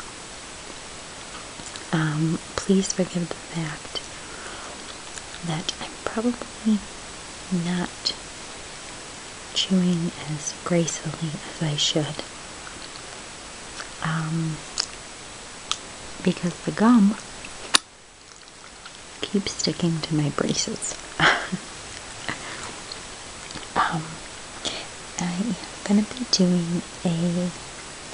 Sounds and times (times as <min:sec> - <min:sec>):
Speech: 0:01.9 - 0:04.0, 0:05.4 - 0:06.8, 0:07.5 - 0:08.2, 0:09.6 - 0:12.3, 0:14.0 - 0:14.6, 0:16.2 - 0:17.2, 0:19.2 - 0:21.0, 0:23.8 - 0:27.6
Chewing, mastication: 0:12.6 - 0:13.2, 0:17.2 - 0:19.1.